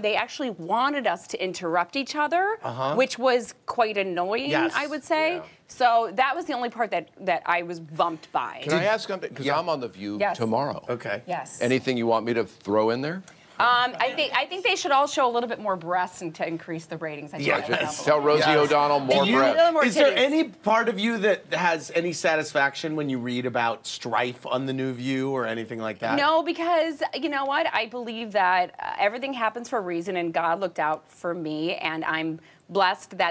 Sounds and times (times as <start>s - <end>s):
Speech: 4.5s - 5.5s, 8.6s - 9.8s.